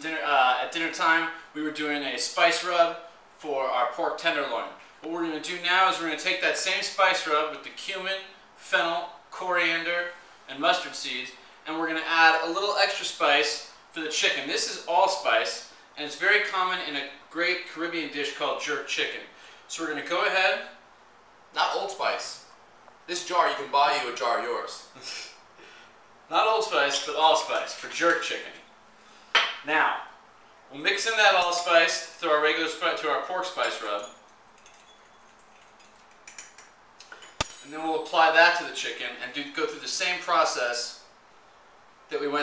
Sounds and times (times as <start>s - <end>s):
Speech: 0.0s - 20.8s, 21.6s - 22.5s, 23.1s - 25.3s, 26.3s - 28.6s, 29.6s - 34.1s, 37.6s - 41.1s, 42.1s - 42.4s.